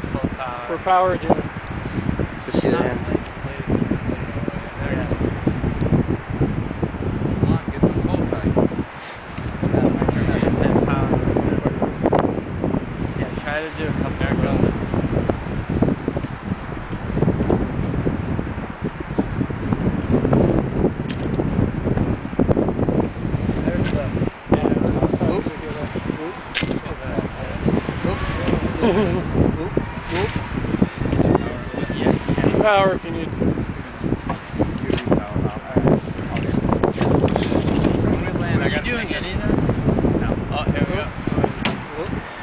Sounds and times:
Speech: 0.0s - 1.4s, 2.4s - 3.7s, 4.3s - 5.2s, 7.4s - 8.6s, 9.7s - 11.8s, 13.2s - 14.7s, 23.6s - 30.3s, 31.4s - 33.4s, 34.8s - 36.6s, 38.0s - 39.6s, 40.2s - 42.2s
Wind noise (microphone): 0.0s - 42.4s.

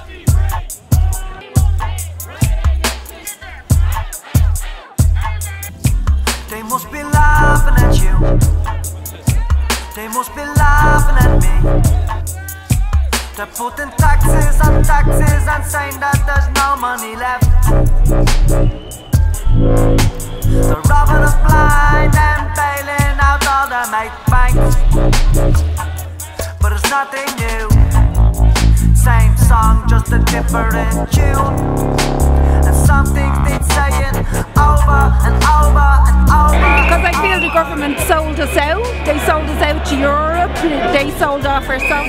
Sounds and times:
Music: 0.0s - 42.0s.

